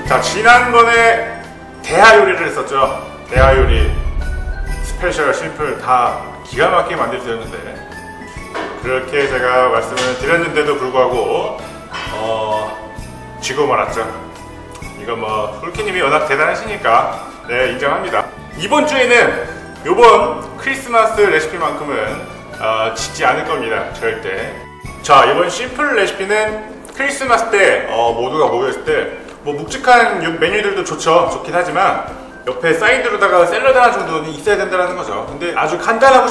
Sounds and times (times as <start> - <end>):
Speech: 0.0 - 7.8, 8.8 - 14.2, 14.9 - 36.3
Music: 0.0 - 36.3.